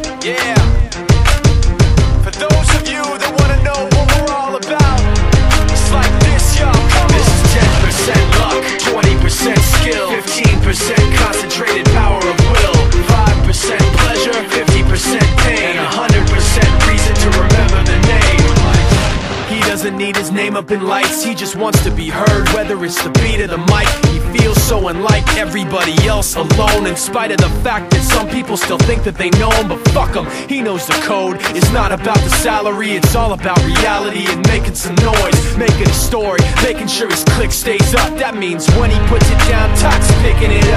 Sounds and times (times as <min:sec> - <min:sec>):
Music: 0:00.0 - 0:40.7.